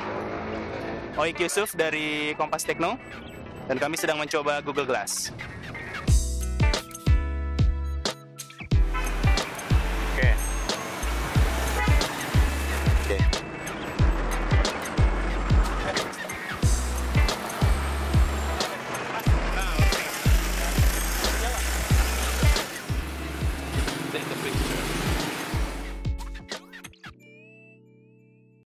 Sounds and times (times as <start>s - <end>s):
Music: 0.0s - 28.6s
Speech: 1.2s - 3.0s, 3.7s - 5.3s, 13.0s - 13.4s, 18.6s - 20.0s, 24.1s - 24.7s.